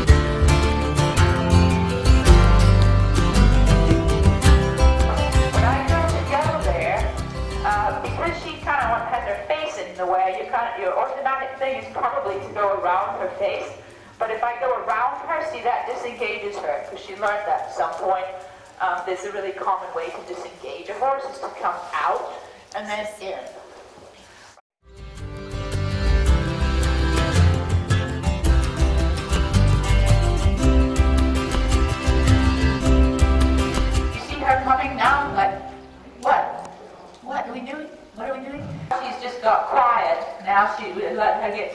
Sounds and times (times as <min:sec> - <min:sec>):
Music: 0:00.0 - 0:09.5, 0:24.8 - 0:36.2
Speech: 0:05.6 - 0:07.1, 0:07.7 - 0:23.6, 0:34.2 - 0:41.7
Clip-clop: 0:14.8 - 0:22.8.